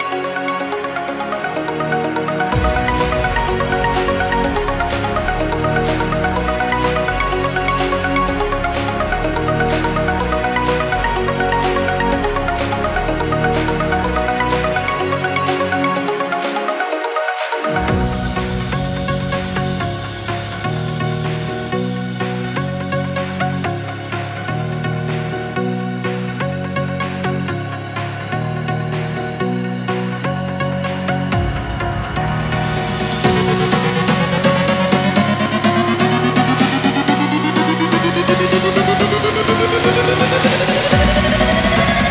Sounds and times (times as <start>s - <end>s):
Music: 0.0s - 42.1s.